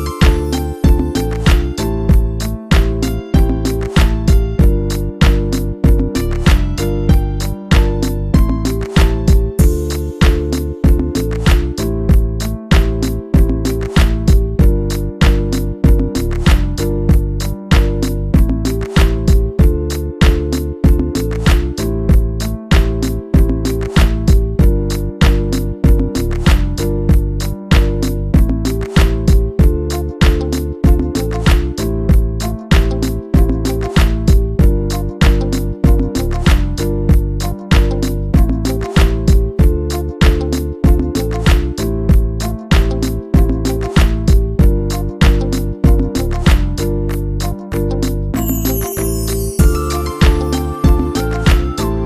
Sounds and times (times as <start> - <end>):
Music: 0.0 - 52.0.